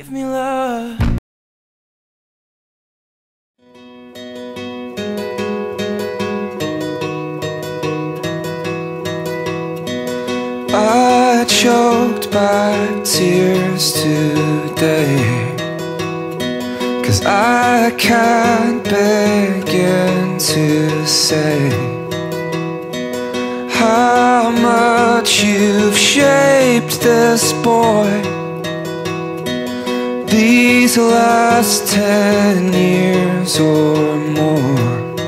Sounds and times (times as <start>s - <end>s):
Acoustic guitar: 0.0s - 1.2s, 3.6s - 35.2s.